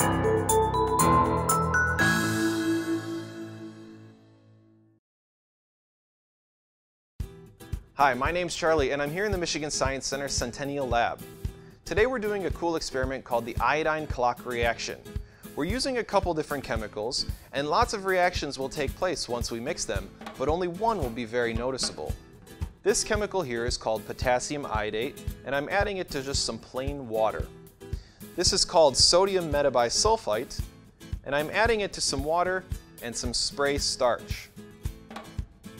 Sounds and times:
Music: 0.0 - 5.0, 7.2 - 35.7
Speech: 8.0 - 11.2, 11.9 - 15.0, 15.6 - 22.2, 22.8 - 27.5, 28.4 - 30.6, 31.2 - 34.5.

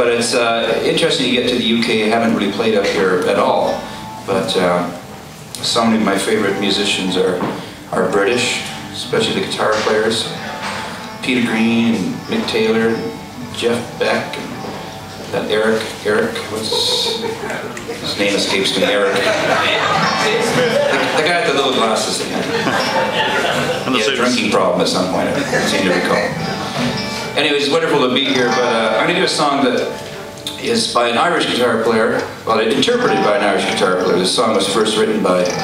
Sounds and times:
Speech: 0.0 - 5.0, 5.6 - 10.4, 11.2 - 14.6, 15.3 - 22.9, 23.8 - 26.4, 27.4 - 35.6
Music: 0.0 - 35.6.

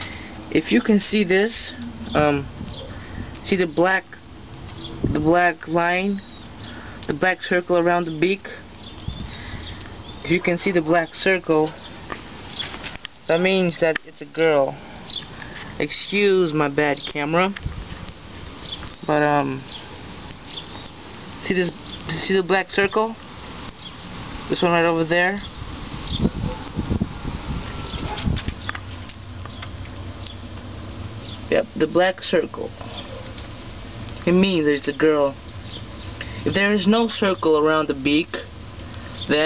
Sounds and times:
Outside, rural or natural: 0.0 - 39.4
Speech: 0.5 - 2.5, 3.4 - 4.2, 5.2 - 6.2, 7.1 - 8.6, 10.2 - 11.8, 13.3 - 14.8, 15.8 - 17.6, 19.1 - 19.7, 21.4 - 23.2, 24.5 - 25.5, 31.5 - 32.8, 34.2 - 35.4, 36.5 - 38.5.

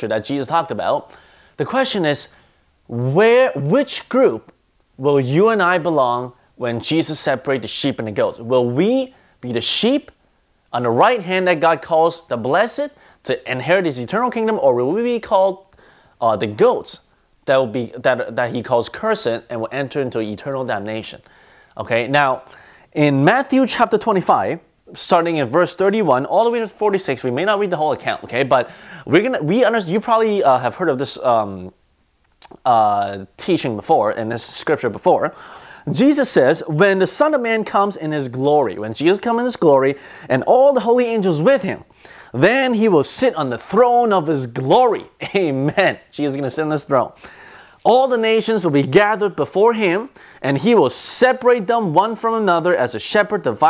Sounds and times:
Speech: 0.0 - 31.8, 32.4 - 47.2, 47.8 - 53.7.

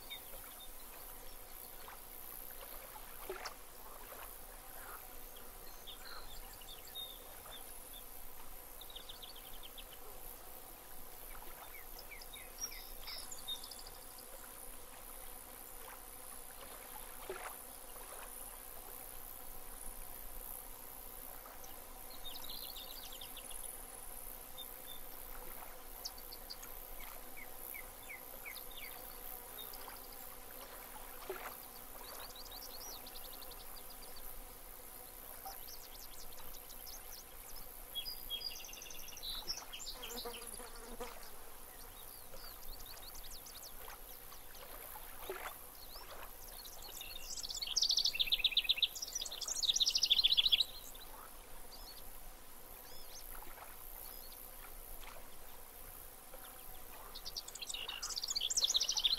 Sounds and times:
Outside, rural or natural: 0.0 - 59.1.

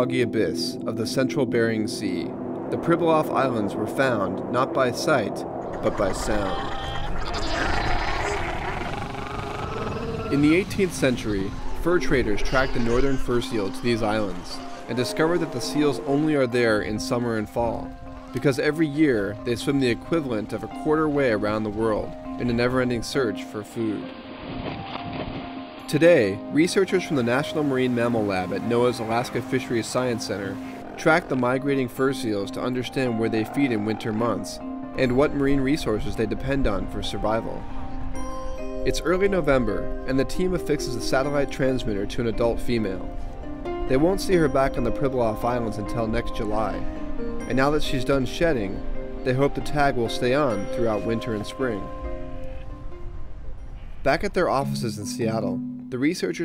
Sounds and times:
Music: 0.0 - 7.6, 9.6 - 56.4
Speech: 0.0 - 8.0, 10.3 - 24.1, 25.9 - 37.6, 38.9 - 43.1, 43.9 - 46.8, 47.5 - 51.9, 54.1 - 56.4.

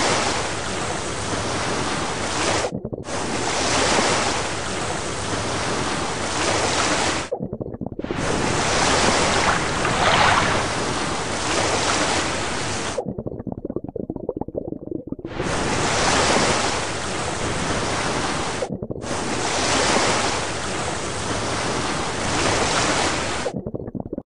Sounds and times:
Waves, surf: 0.0 - 7.3, 8.0 - 13.0, 15.3 - 23.6.

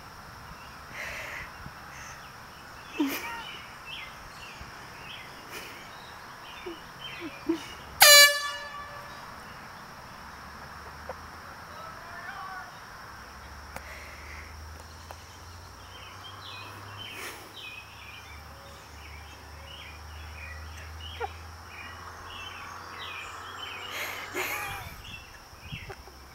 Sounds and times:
Outside, rural or natural: 0.0 - 26.3
Speech: 11.7 - 12.8.

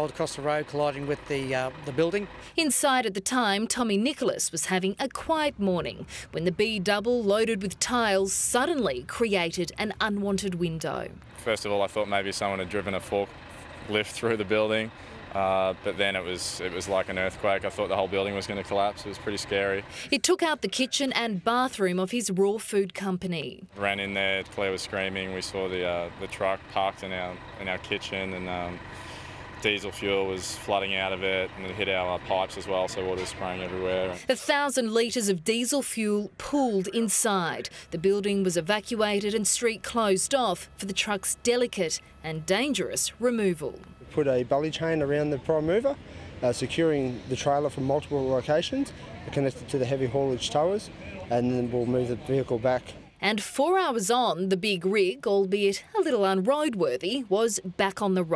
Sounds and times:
Speech: 0.0 - 13.3, 13.9 - 28.8, 29.6 - 58.3
Vehicle: 0.0 - 58.3.

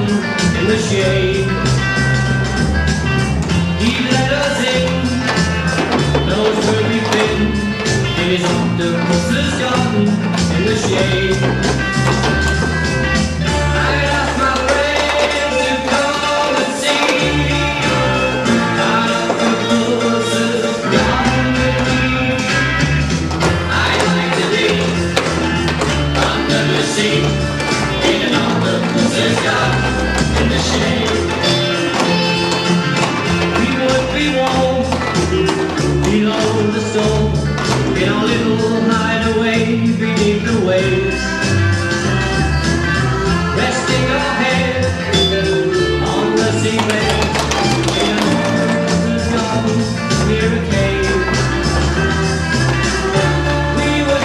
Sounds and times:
Music: 0.0 - 54.2.

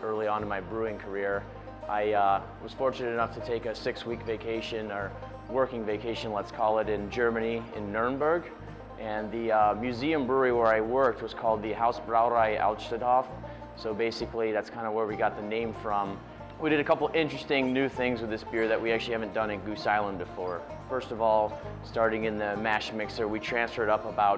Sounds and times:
Music: 0.0 - 24.3
Speech: 0.0 - 24.3.

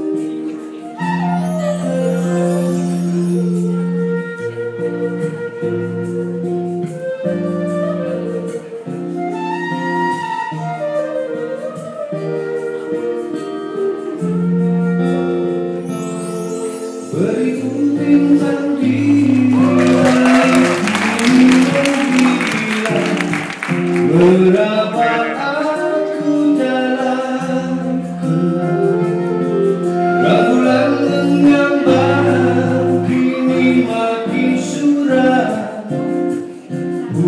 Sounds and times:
Music: 0.0 - 37.2.

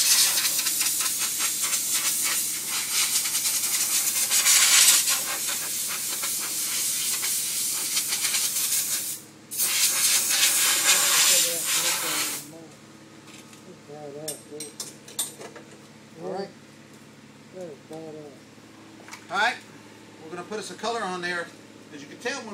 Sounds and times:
Spray: 0.0 - 12.5.

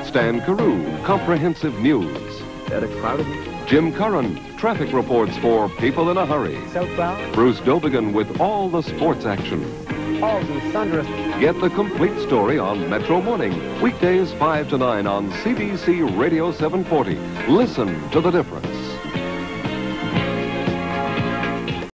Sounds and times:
Speech: 0.0 - 19.0
Music: 0.0 - 21.9
Radio: 4.9 - 17.0.

